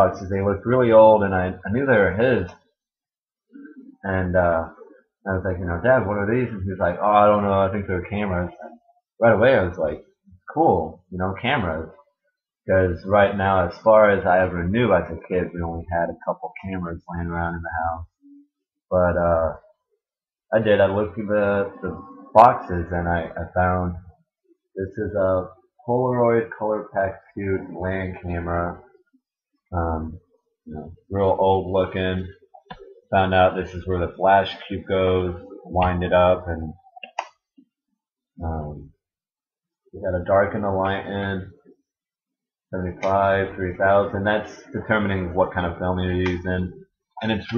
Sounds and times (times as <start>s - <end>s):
Speech: 0.0s - 2.6s, 3.6s - 12.0s, 12.7s - 18.1s, 18.9s - 19.7s, 20.5s - 24.1s, 24.8s - 28.9s, 29.7s - 37.2s, 38.4s - 38.9s, 40.0s - 41.6s, 42.8s - 47.5s.